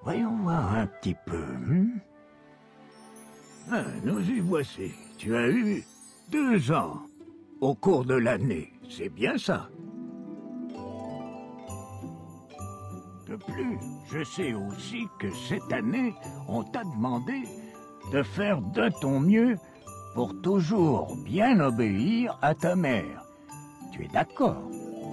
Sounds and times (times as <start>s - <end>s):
Speech: 0.0s - 2.1s, 3.7s - 9.7s, 13.3s - 17.5s, 18.1s - 19.6s, 20.2s - 23.2s, 23.9s - 24.7s
Music: 0.0s - 25.1s.